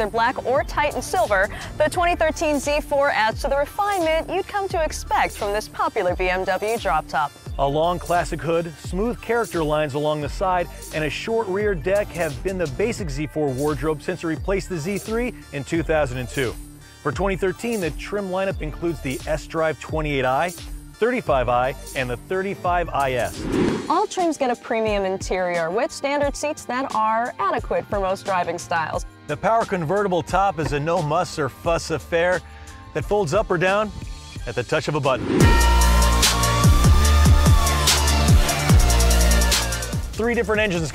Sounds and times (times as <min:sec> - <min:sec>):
Speech: 0:00.0 - 0:32.4, 0:33.0 - 0:35.2, 0:40.2 - 0:40.9
Music: 0:00.0 - 0:40.9.